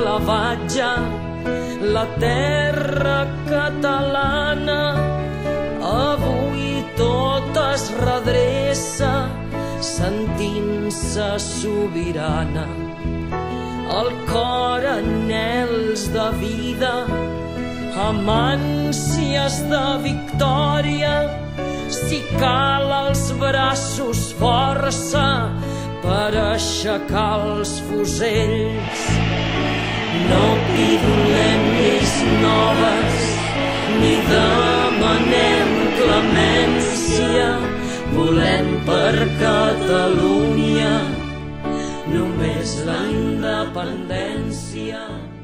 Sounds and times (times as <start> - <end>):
Music: 0.0 - 45.4.